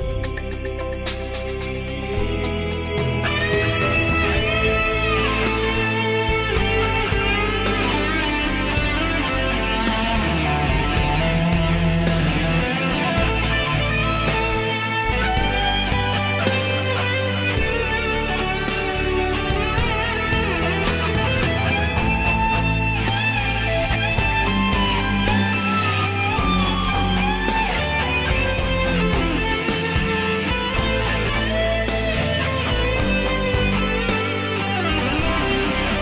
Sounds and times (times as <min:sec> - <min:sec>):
Bass guitar: 0:00.0 - 0:36.0
Strum: 0:00.0 - 0:36.0.